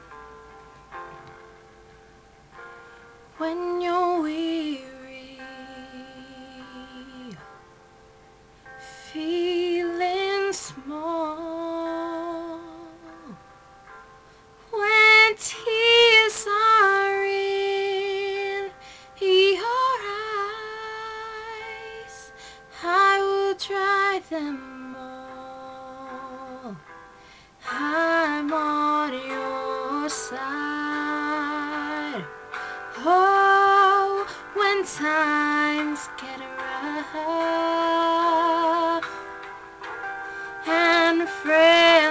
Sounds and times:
Music: 0.0 - 42.1.

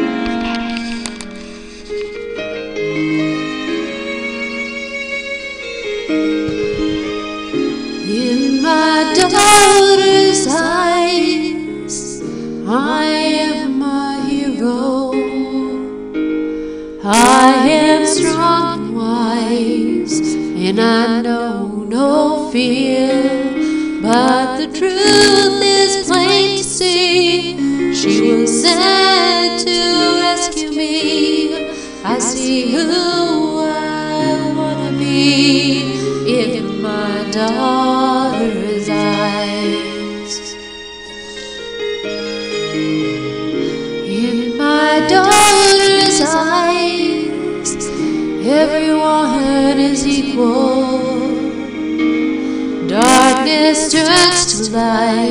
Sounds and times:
Music: 0.0 - 55.3.

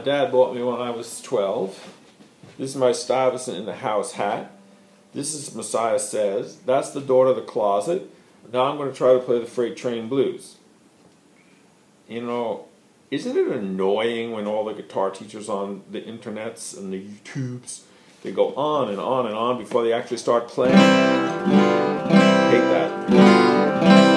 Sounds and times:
Speech: 0.0 - 2.0, 2.6 - 4.6, 5.2 - 10.6, 12.1 - 20.8, 22.5 - 23.0.

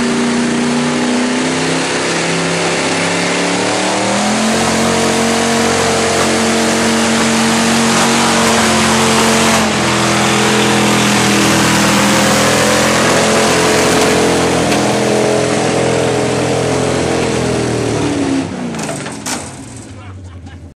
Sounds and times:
Truck: 0.0 - 20.7.

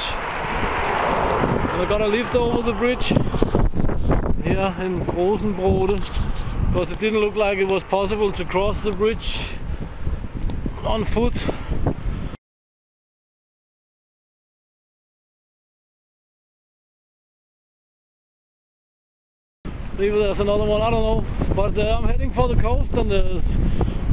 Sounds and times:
Outside, rural or natural: 0.0 - 12.4, 19.7 - 24.1
Speech: 1.8 - 3.2, 4.4 - 6.1, 6.8 - 9.6, 10.8 - 11.6, 20.0 - 23.6.

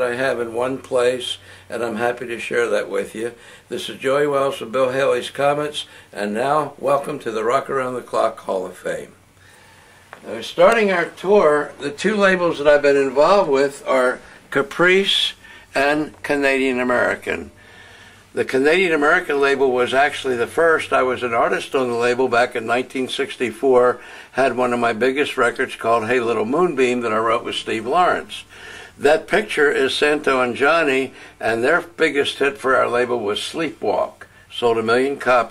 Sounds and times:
Speech: 0.0 - 9.2, 10.2 - 17.6, 18.4 - 35.5.

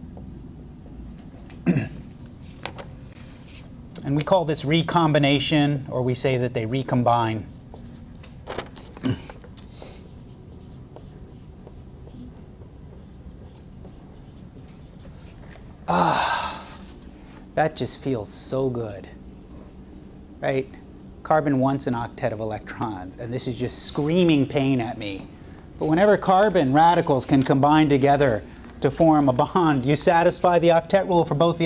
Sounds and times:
Speech: 4.0 - 7.5, 17.6 - 19.2, 20.4 - 31.6.

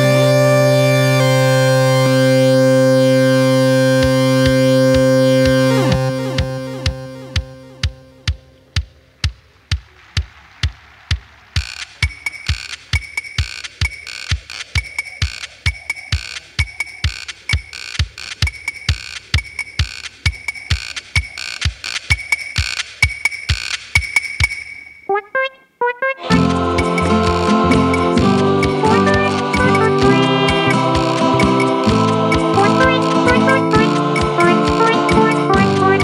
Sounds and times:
Drum machine: 4.0 - 36.0.

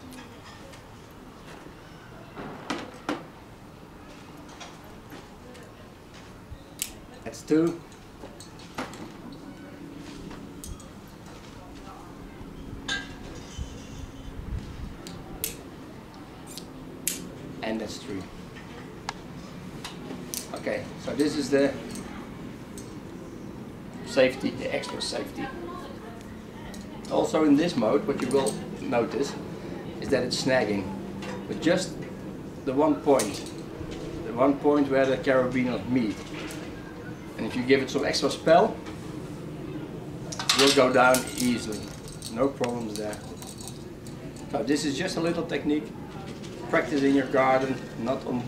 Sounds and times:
Outside, urban or manmade: 0.0 - 48.4.

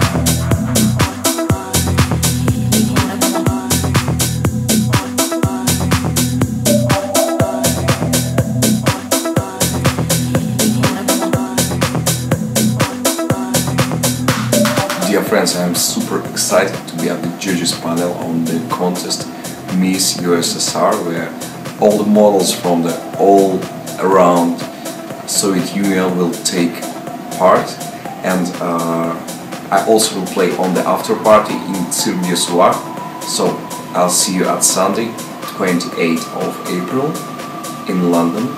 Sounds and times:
Music: 0.0 - 38.5
Speech: 14.9 - 24.7, 25.3 - 37.2, 37.9 - 38.5.

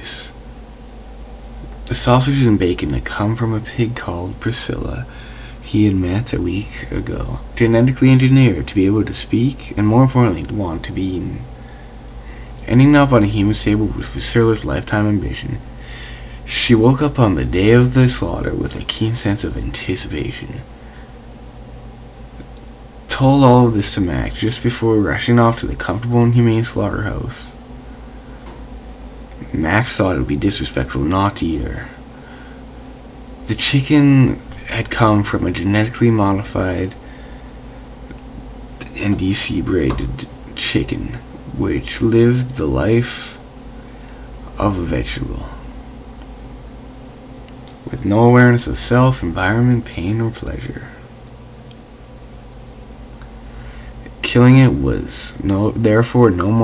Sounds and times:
Speech: 0.0 - 0.4, 1.9 - 11.5, 12.6 - 15.7, 16.4 - 20.7, 23.1 - 27.6, 29.4 - 32.0, 33.4 - 37.0, 38.8 - 43.4, 44.5 - 45.7, 47.8 - 51.1, 54.1 - 56.6.

